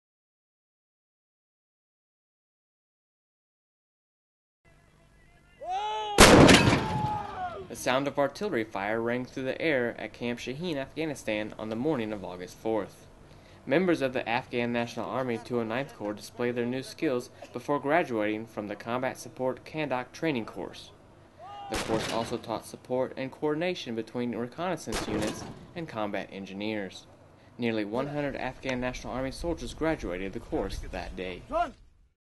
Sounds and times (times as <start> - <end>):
Artillery fire: 6.2 - 7.3, 21.8 - 22.4, 24.9 - 25.8.